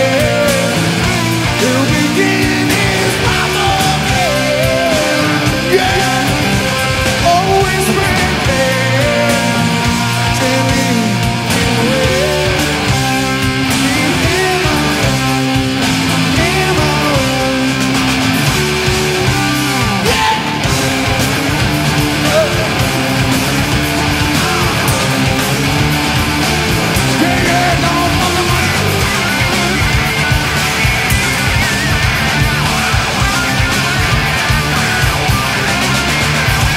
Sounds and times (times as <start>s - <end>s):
Singing: 0.0s - 15.4s, 16.1s - 17.8s, 27.0s - 29.3s
Punk rock: 0.0s - 36.7s.